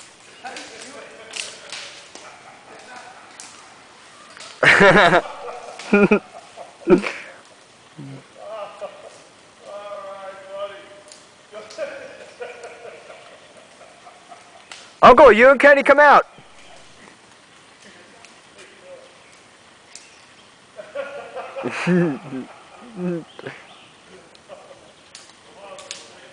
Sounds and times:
Speech: 0:15.0 - 0:16.3.

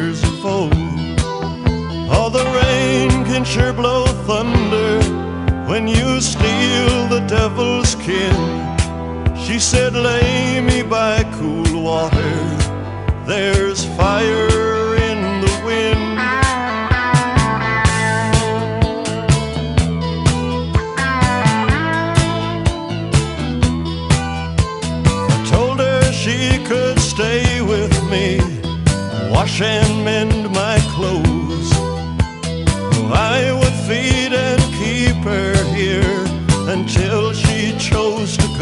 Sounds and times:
Music: 0:00.0 - 0:38.6.

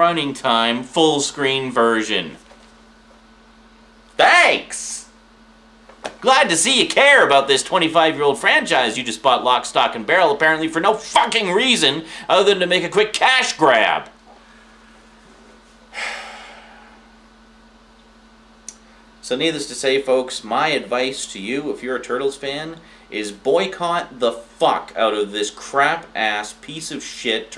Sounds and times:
Speech: 0:00.0 - 0:02.4, 0:04.2 - 0:05.2, 0:06.2 - 0:14.2, 0:19.2 - 0:27.5
Inside, small room: 0:00.0 - 0:27.5.

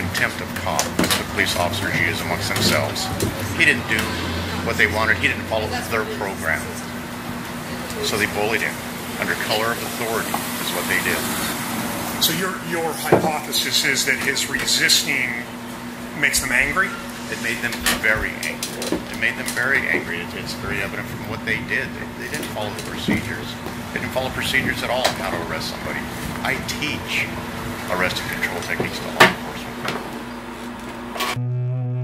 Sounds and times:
Speech: 0:00.0 - 0:06.9, 0:07.8 - 0:11.6, 0:12.2 - 0:15.5, 0:16.1 - 0:29.9.

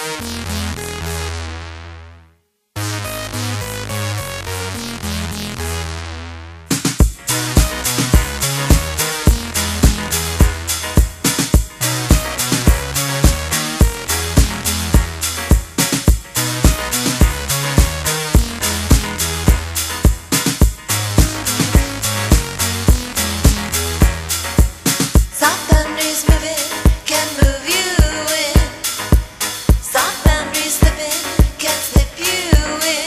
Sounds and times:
Music: 0:00.0 - 0:33.0.

